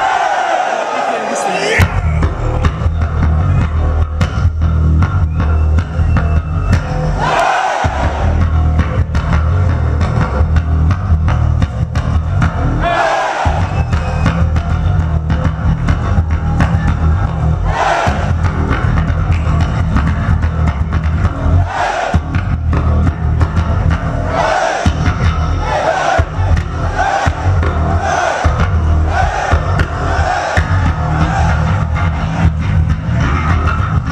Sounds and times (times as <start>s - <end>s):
Strum: 1.8s - 34.1s.